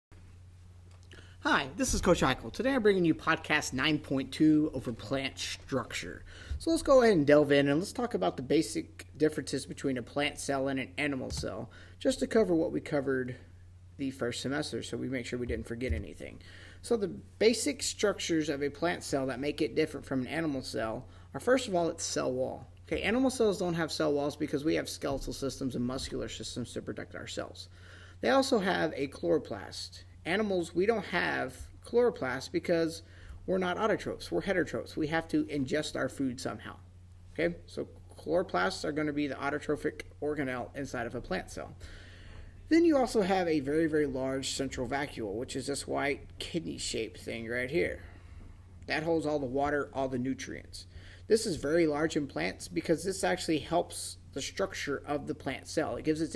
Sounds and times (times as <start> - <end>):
Speech: 1.4 - 41.8, 42.7 - 48.1, 48.8 - 56.3.